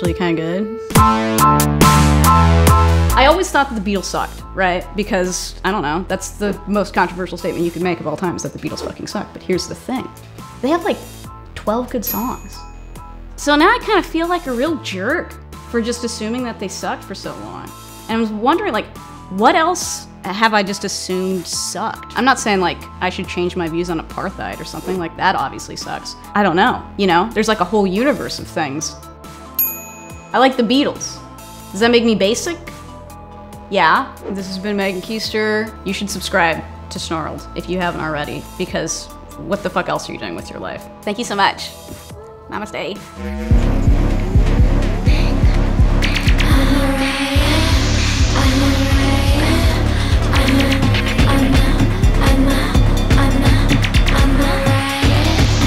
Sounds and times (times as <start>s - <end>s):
Speech: 0.0s - 0.9s, 3.1s - 12.6s, 13.4s - 29.0s, 30.4s - 31.2s, 31.8s - 32.7s, 33.7s - 41.8s, 42.5s - 43.4s
Music: 0.0s - 55.6s.